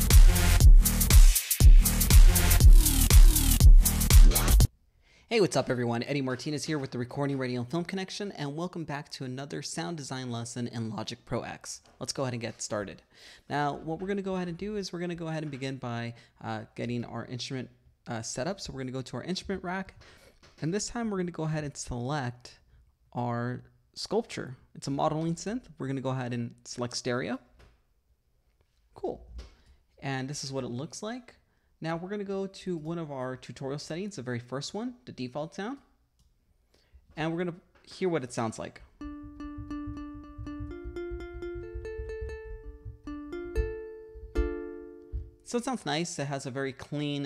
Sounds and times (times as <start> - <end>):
Speech: 5.3 - 20.0, 20.6 - 27.5, 29.0 - 29.4, 30.0 - 35.9, 37.2 - 38.9, 45.5 - 47.2.